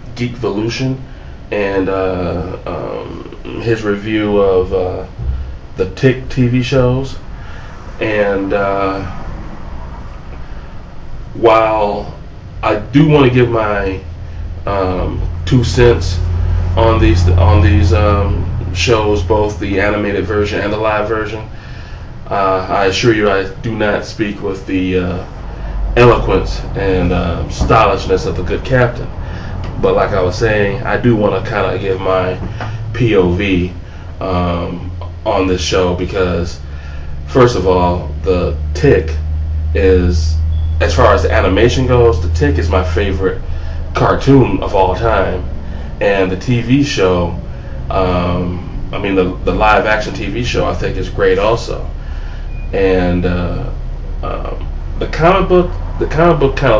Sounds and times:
Speech: 0.0 - 7.2, 8.0 - 9.2, 11.4 - 21.6, 22.3 - 36.7, 37.3 - 52.0, 52.7 - 56.7.

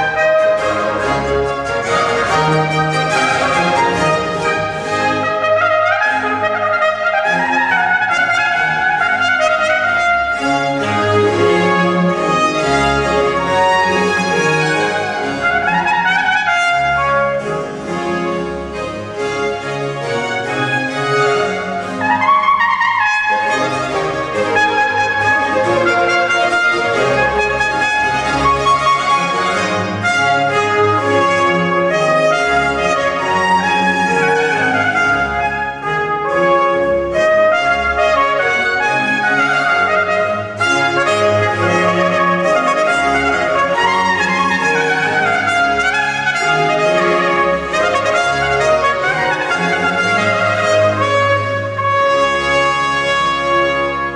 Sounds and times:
Orchestra: 0.0 - 54.1
Trumpet: 0.0 - 54.1
Violin, fiddle: 0.0 - 54.1.

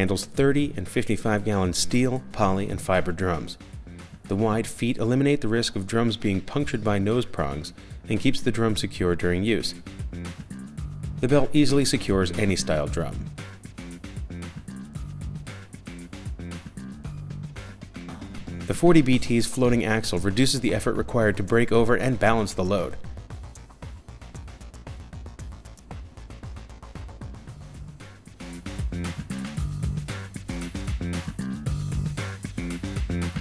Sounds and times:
Speech: 0.0 - 3.6, 4.3 - 9.8, 11.2 - 13.3, 18.7 - 23.0
Drum: 9.8 - 19.2, 23.0 - 33.4.

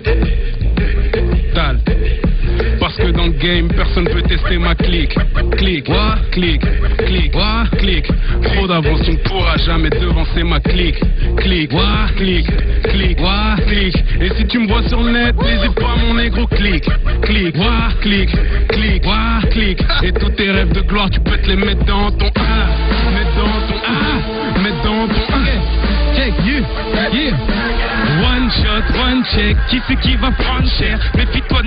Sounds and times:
Music: 0.0 - 31.6.

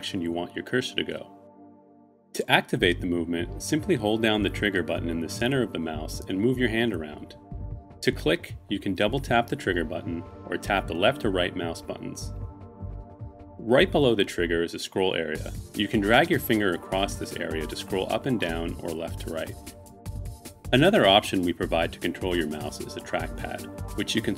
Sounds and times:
Speech: 0.0 - 1.3, 2.4 - 7.4, 8.0 - 12.3, 13.6 - 19.6, 20.7 - 24.3
Music: 0.0 - 24.3.

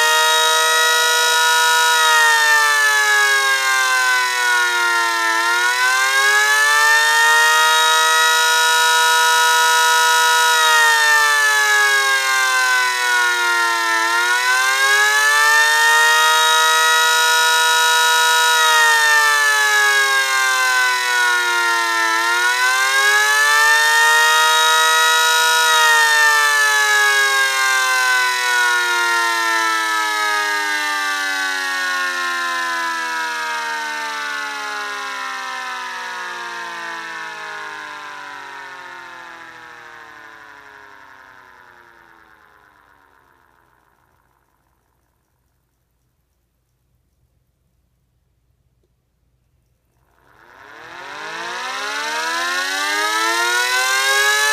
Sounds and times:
Civil defense siren: 0.0 - 44.7, 50.0 - 54.5.

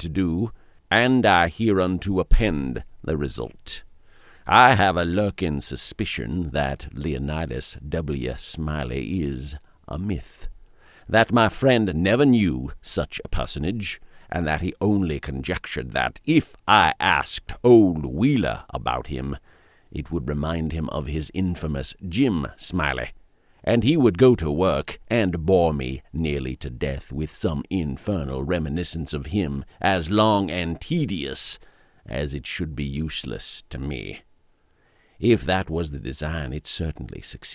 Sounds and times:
Speech: 0.0 - 3.9, 4.5 - 10.5, 11.1 - 34.3, 35.2 - 37.5.

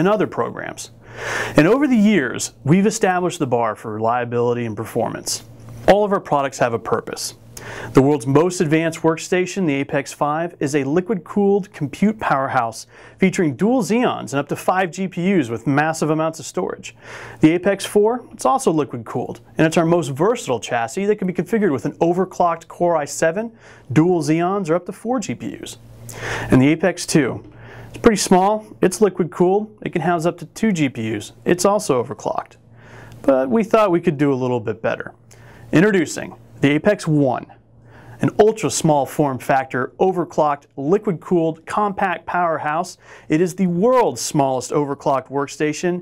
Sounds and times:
Speech: 0.0 - 1.0, 1.6 - 25.8, 26.5 - 32.6, 33.2 - 37.6, 38.2 - 46.0.

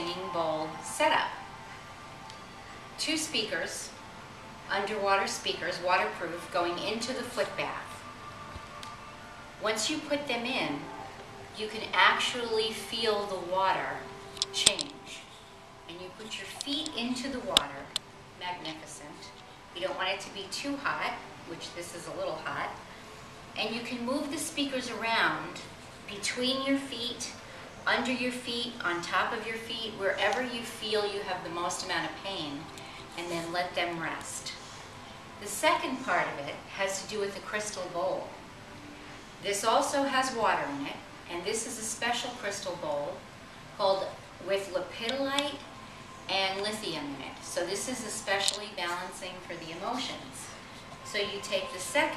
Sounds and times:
Speech: 0.0 - 1.4, 3.0 - 4.0, 4.7 - 8.0, 9.6 - 10.9, 11.6 - 15.3, 15.9 - 22.8, 23.6 - 34.6, 35.4 - 38.4, 39.4 - 43.2, 43.8 - 45.6, 46.3 - 52.1.

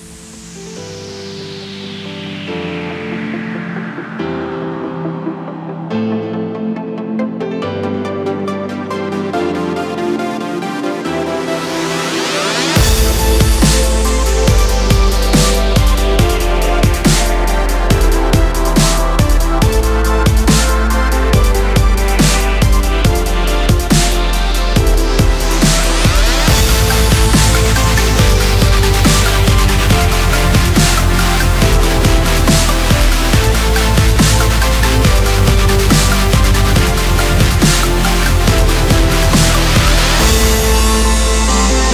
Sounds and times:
Dubstep: 8.7 - 41.9.

